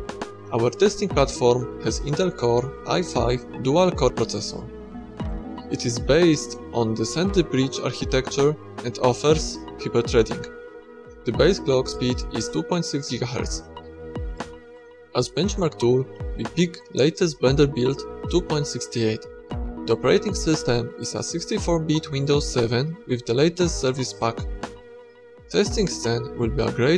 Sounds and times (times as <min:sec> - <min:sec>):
Music: 0:00.0 - 0:26.9
Speech: 0:00.5 - 0:04.7, 0:05.7 - 0:10.6, 0:11.3 - 0:13.7, 0:15.2 - 0:19.3, 0:19.9 - 0:24.5, 0:25.5 - 0:26.9.